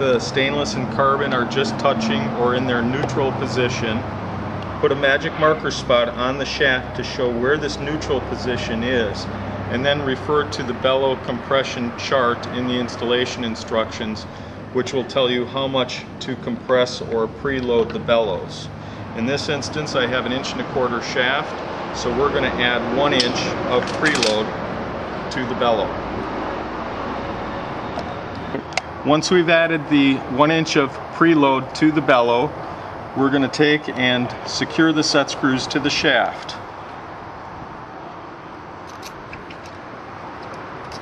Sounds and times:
Speech: 0:00.0 - 0:04.0, 0:04.8 - 0:24.5, 0:25.3 - 0:26.0, 0:28.6 - 0:32.6, 0:33.2 - 0:36.6.

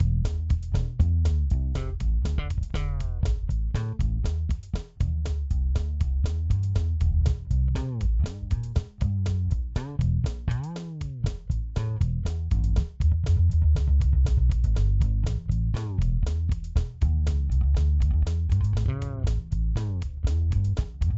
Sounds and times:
Percussion: 0:00.0 - 0:21.1.

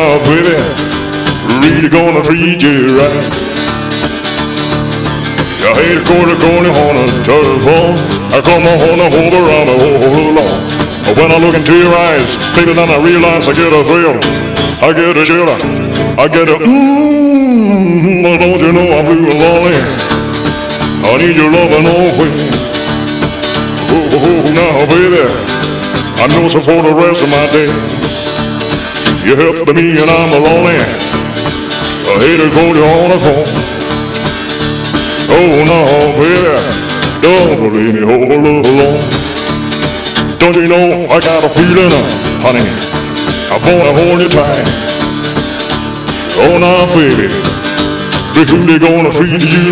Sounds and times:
Music: 0:00.0 - 0:49.7.

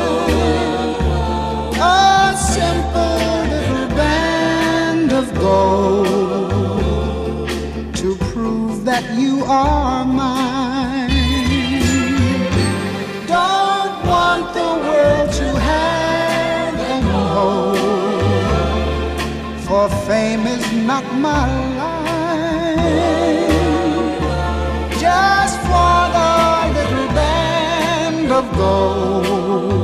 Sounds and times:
Music: 0:00.0 - 0:29.8
Singing: 0:13.3 - 0:29.8.

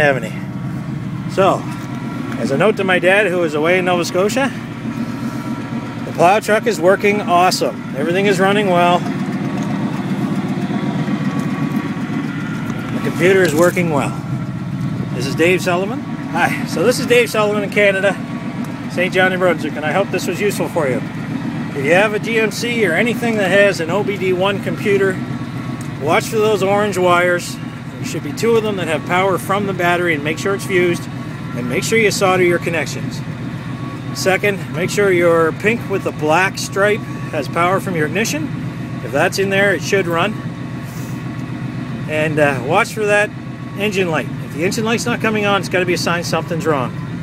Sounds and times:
Speech: 0:00.0 - 0:00.5, 0:01.3 - 0:01.7, 0:02.4 - 0:04.6, 0:06.1 - 0:09.1, 0:13.0 - 0:14.2, 0:15.2 - 0:18.2, 0:18.9 - 0:21.0, 0:21.8 - 0:25.2, 0:26.0 - 0:33.2, 0:34.2 - 0:40.4, 0:42.1 - 0:47.0
Engine: 0:00.0 - 0:47.2
Outside, rural or natural: 0:00.0 - 0:47.2
Vehicle: 0:00.0 - 0:47.2.

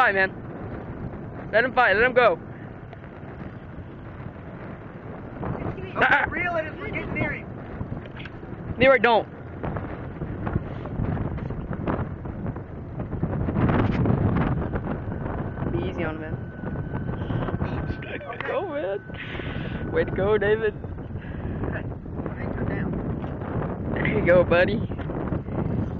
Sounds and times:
Speech: 0:05.6 - 0:07.4, 0:18.0 - 0:19.0.

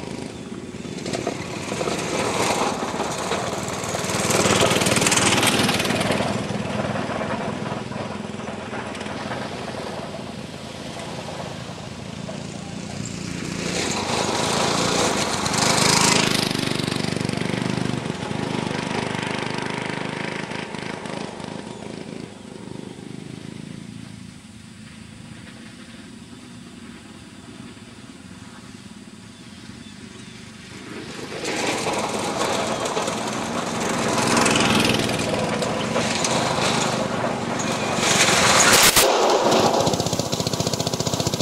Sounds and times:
Vehicle: 0:00.0 - 0:41.4.

